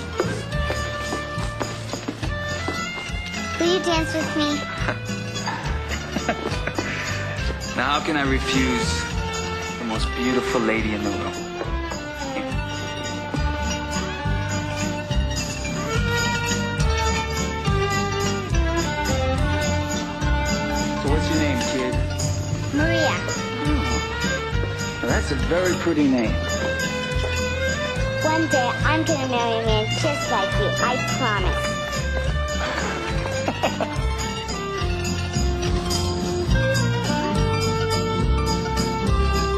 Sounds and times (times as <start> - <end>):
Music: 0.0 - 39.5.